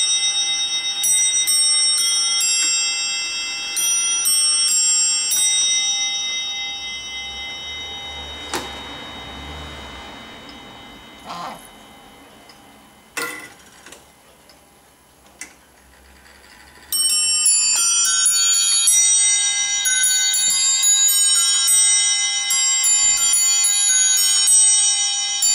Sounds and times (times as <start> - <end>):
Chime: 0.0 - 14.9, 16.3 - 25.5.